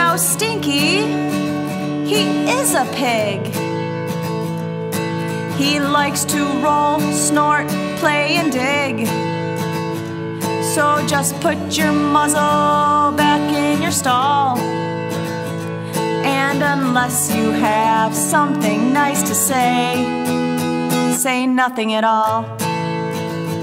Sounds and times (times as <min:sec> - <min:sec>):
Music: 0:00.0 - 0:23.6.